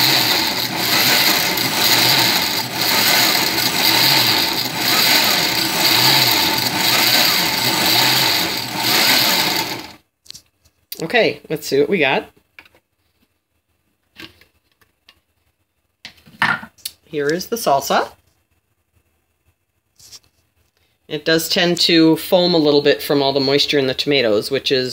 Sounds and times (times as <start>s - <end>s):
Blender: 0.0s - 10.0s
Speech: 11.0s - 12.4s, 17.1s - 18.2s, 21.1s - 24.9s.